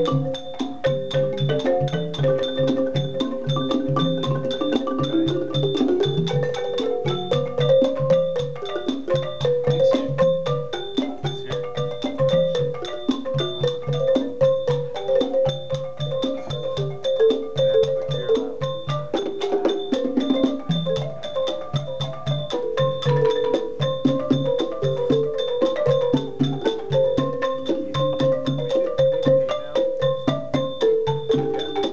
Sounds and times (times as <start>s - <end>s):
Percussion: 0.0s - 31.9s
Traditional music: 0.0s - 31.9s
Speech: 9.7s - 10.4s, 11.2s - 11.7s, 18.1s - 18.6s, 29.5s - 29.9s.